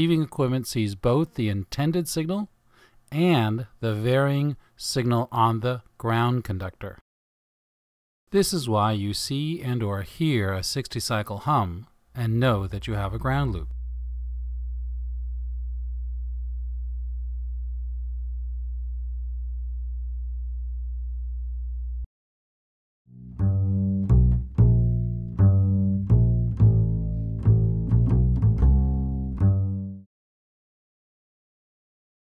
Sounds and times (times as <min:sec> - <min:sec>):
Music: 0:23.1 - 0:30.1.